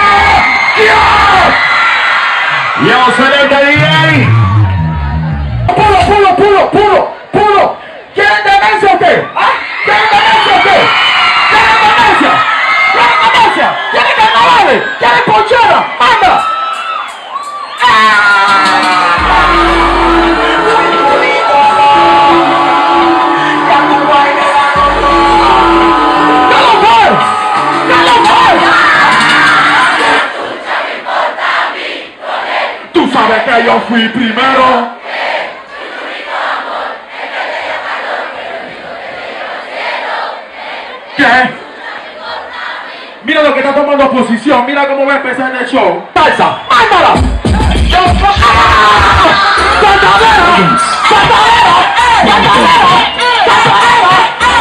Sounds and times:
Music: 4.2s - 5.8s, 18.3s - 30.2s, 47.2s - 50.0s.

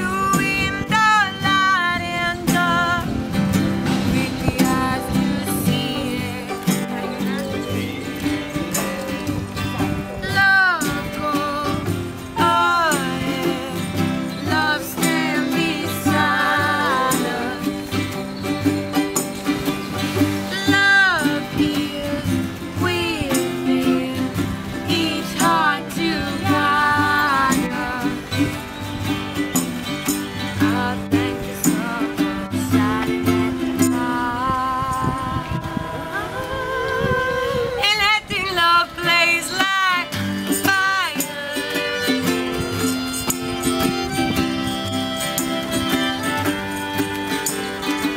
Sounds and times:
Music: 0.0s - 48.1s.

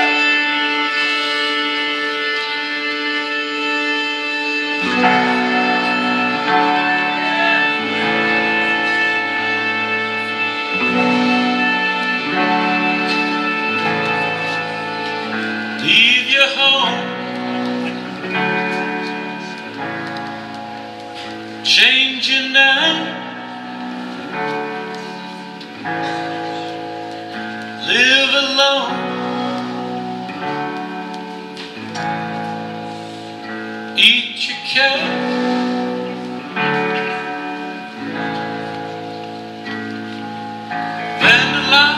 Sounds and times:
Music: 0.0s - 41.9s.

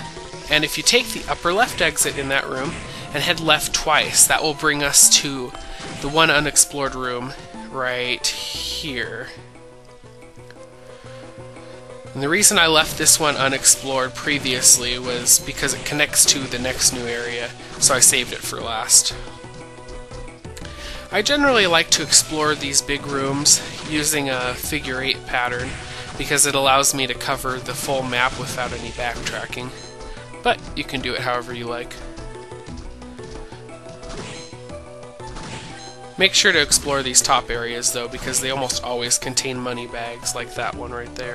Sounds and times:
Music: 0.0s - 41.3s
Speech: 0.5s - 9.4s, 12.2s - 19.2s, 21.1s - 29.8s, 30.5s - 32.0s, 36.2s - 41.3s.

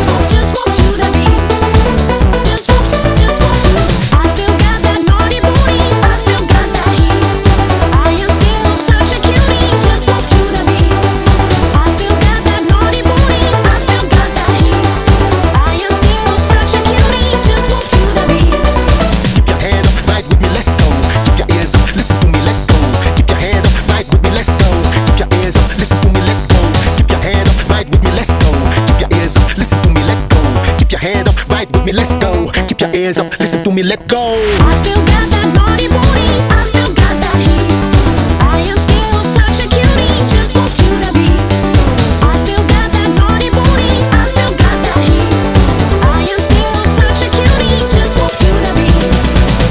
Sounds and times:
Music: 0.0s - 49.7s.

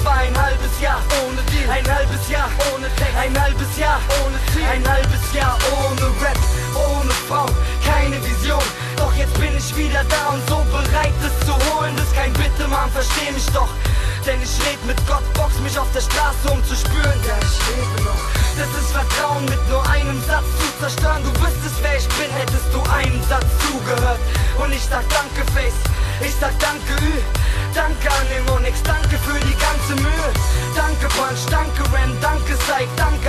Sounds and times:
Music: 0.0s - 33.2s.

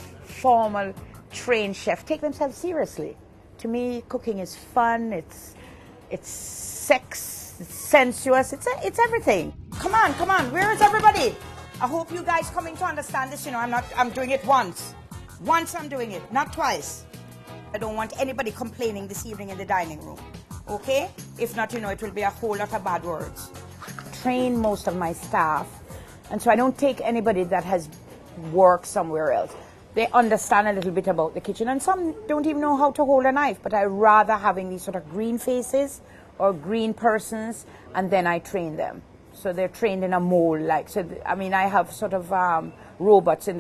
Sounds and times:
Music: 0.0s - 35.9s
Speech: 0.2s - 17.0s, 17.8s - 23.5s, 24.2s - 25.7s, 26.3s - 43.6s.

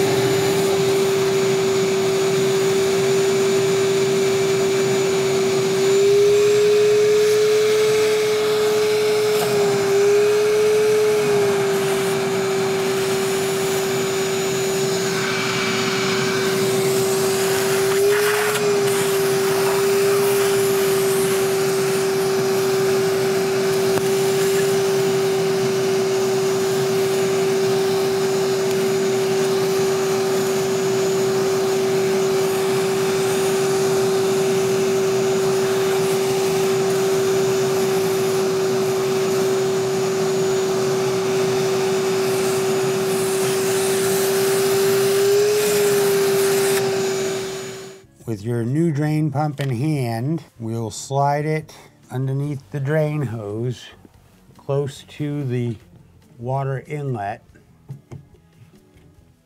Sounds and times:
Speech: 48.2s - 54.0s, 54.6s - 55.8s, 56.4s - 57.4s.

